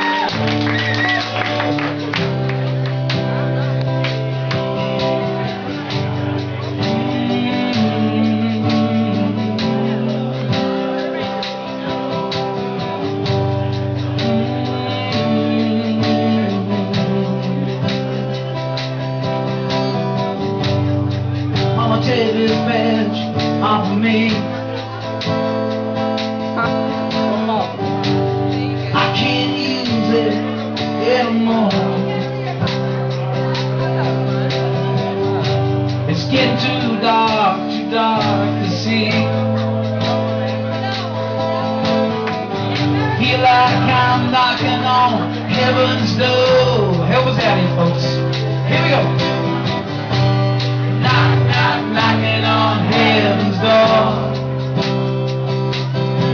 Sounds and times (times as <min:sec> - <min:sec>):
Music: 0:00.0 - 0:56.3
Speech: 0:26.5 - 0:49.8.